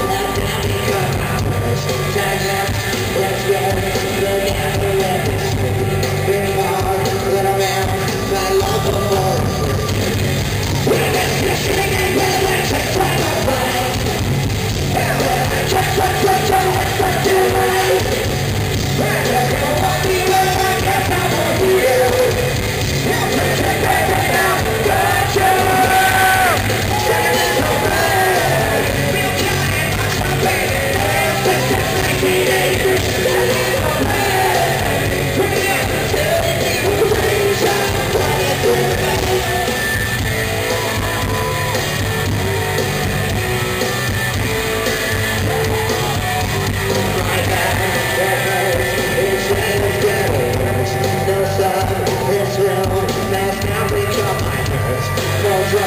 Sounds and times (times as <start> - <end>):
Music: 0.0 - 55.8.